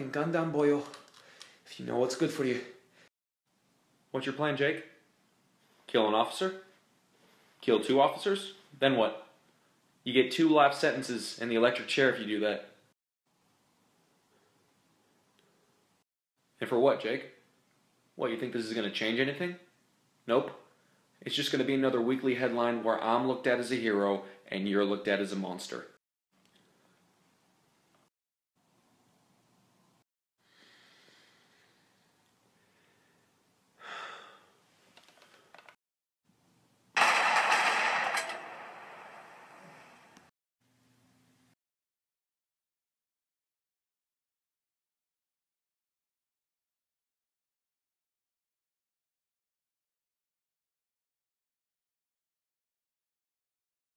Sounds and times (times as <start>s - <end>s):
Speech: 0.0s - 1.0s, 1.7s - 2.8s, 4.1s - 5.0s, 5.9s - 6.7s, 7.6s - 9.3s, 10.1s - 12.8s, 16.6s - 17.4s, 18.2s - 19.7s, 20.3s - 26.0s
Inside, small room: 0.0s - 41.6s.